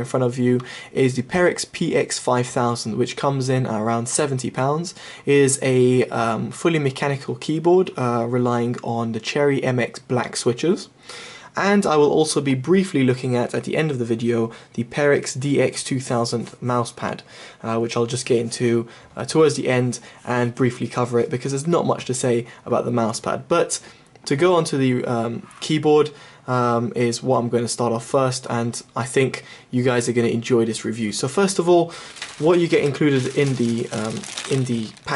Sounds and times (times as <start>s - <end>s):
Speech: 0.0s - 35.1s.